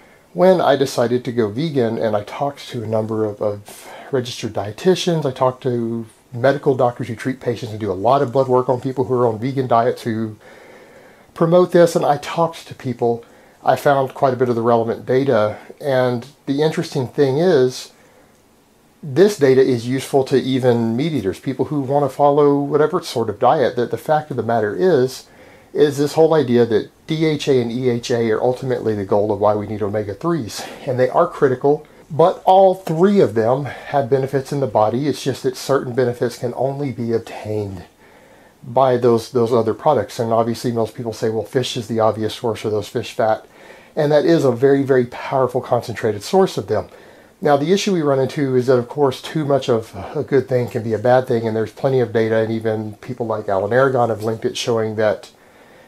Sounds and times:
Speech: 0:00.4 - 0:10.4, 0:11.4 - 0:18.0, 0:19.0 - 0:38.0, 0:38.6 - 0:55.4.

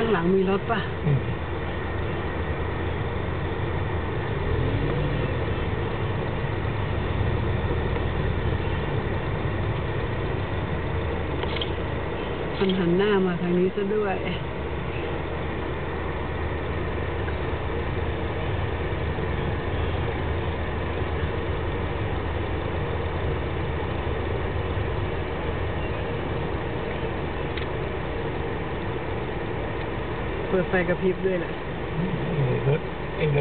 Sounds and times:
Speech: 0:00.0 - 0:01.4, 0:12.6 - 0:14.4, 0:30.5 - 0:33.4
Car: 0:00.0 - 0:33.4.

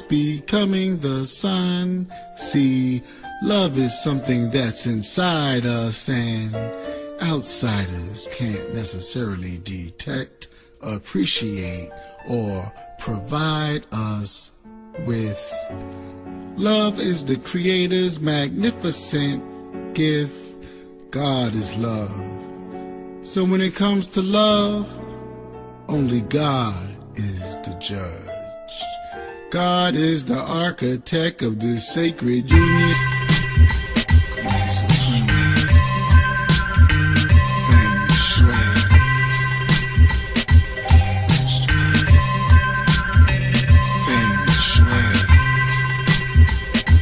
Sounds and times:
Male speech, man speaking: 0:00.0 - 0:15.7, 0:16.6 - 0:22.4, 0:23.2 - 0:25.0, 0:25.9 - 0:33.1, 0:34.4 - 0:35.7, 0:37.6 - 0:39.0, 0:41.3 - 0:42.2, 0:44.0 - 0:45.4
Music: 0:00.0 - 0:47.0
Narration, monologue: 0:00.0 - 0:47.0.

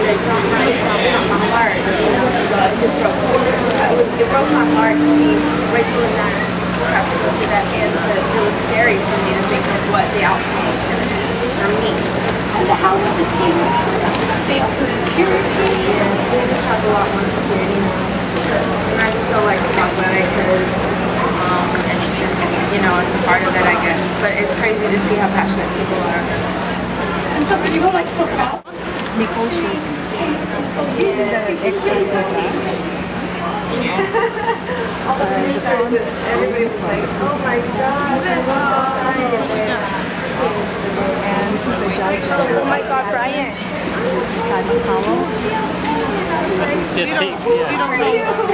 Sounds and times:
Speech: 0:00.0 - 0:48.5.

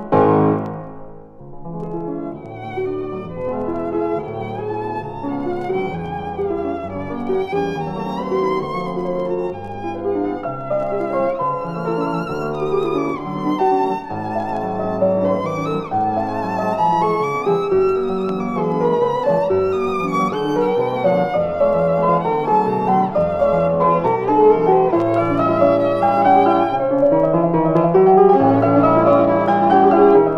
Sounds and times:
Violin, fiddle: 0:02.4 - 0:27.1.

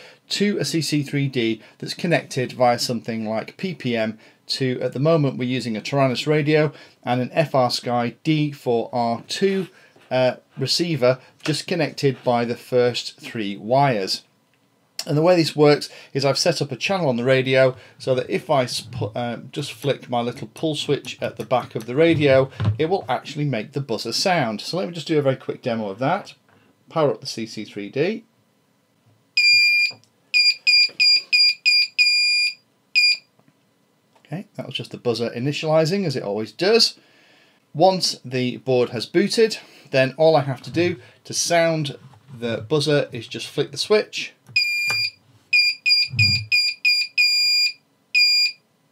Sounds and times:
Speech: 0:00.3 - 0:14.3, 0:15.0 - 0:28.3, 0:34.2 - 0:37.0, 0:37.8 - 0:44.4.

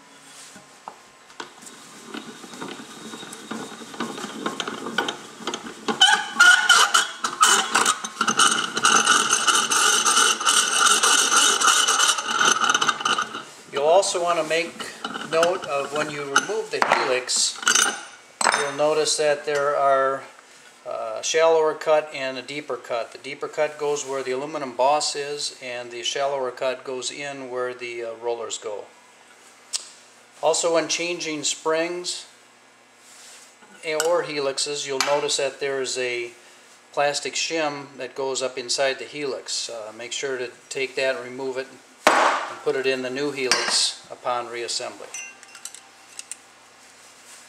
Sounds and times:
Ratchet, pawl: 0:01.4 - 0:13.6
Gears: 0:01.6 - 0:13.5.

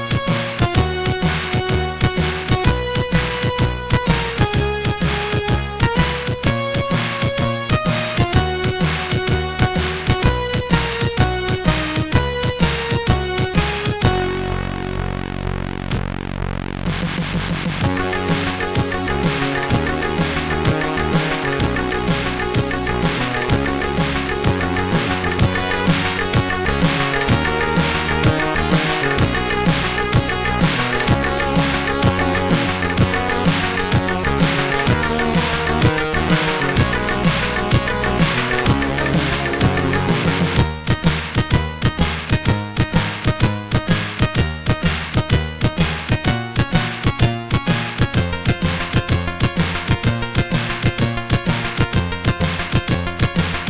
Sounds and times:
Music: 0:00.0 - 0:53.6.

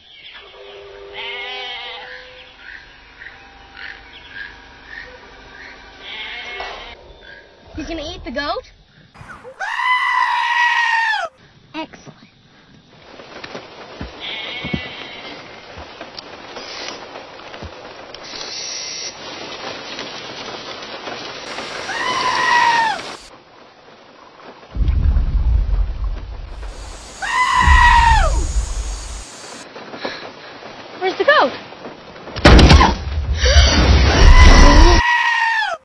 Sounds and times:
Bleat: 0:01.1 - 0:02.2, 0:06.0 - 0:07.0, 0:09.6 - 0:11.3, 0:14.2 - 0:15.5, 0:21.6 - 0:23.3, 0:26.6 - 0:29.6, 0:34.3 - 0:35.8
Speech: 0:31.0 - 0:31.6.

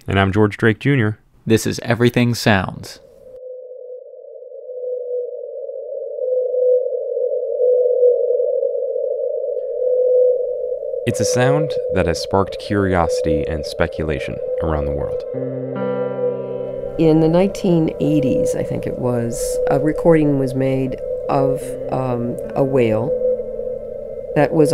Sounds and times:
Speech: 0:00.0 - 0:03.0, 0:11.1 - 0:15.2, 0:17.0 - 0:23.1, 0:24.4 - 0:24.7
Whale vocalization: 0:03.4 - 0:15.4, 0:16.3 - 0:24.7
Music: 0:15.2 - 0:19.0.

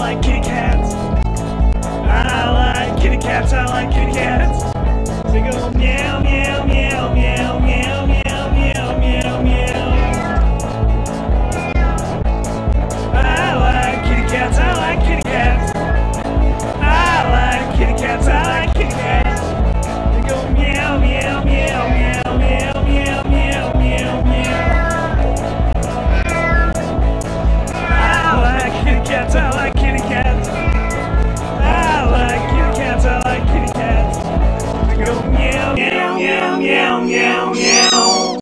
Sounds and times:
Music: 0:00.0 - 0:38.4
Meow: 0:09.7 - 0:10.5, 0:11.4 - 0:12.2, 0:13.6 - 0:14.8, 0:15.5 - 0:16.2, 0:24.4 - 0:25.3, 0:26.1 - 0:26.9, 0:27.7 - 0:28.3, 0:30.5 - 0:32.6, 0:37.6 - 0:38.4.

